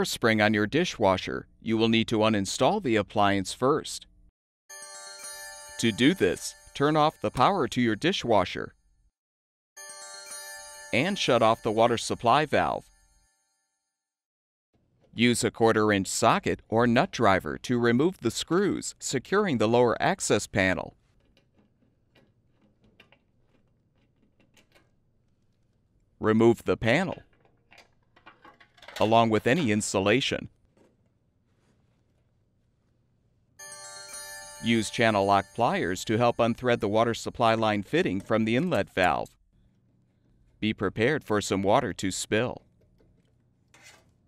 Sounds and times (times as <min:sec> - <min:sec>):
Speech: 0:00.0 - 0:04.1, 0:05.8 - 0:08.7, 0:11.0 - 0:12.8, 0:15.2 - 0:21.0, 0:26.2 - 0:27.2, 0:29.0 - 0:30.5, 0:34.6 - 0:39.3, 0:40.6 - 0:42.6.